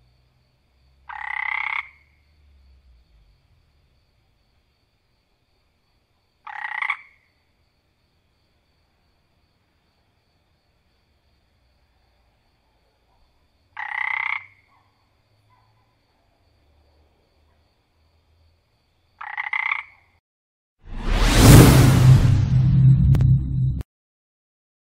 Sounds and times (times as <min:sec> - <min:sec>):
Croak: 0:00.0 - 0:07.9, 0:11.6 - 0:20.2.